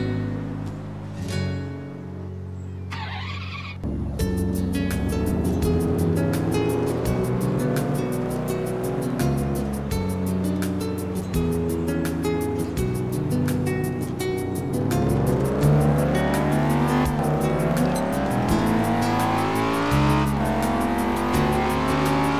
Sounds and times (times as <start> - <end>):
Music: 0.0 - 22.3.